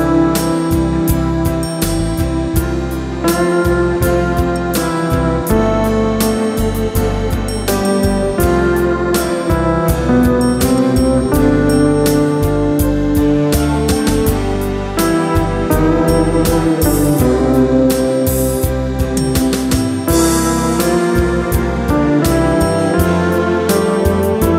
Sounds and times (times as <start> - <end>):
Classical music: 0.0 - 24.5
Steel guitar, slide guitar: 0.0 - 24.5
Tender music: 0.0 - 24.5.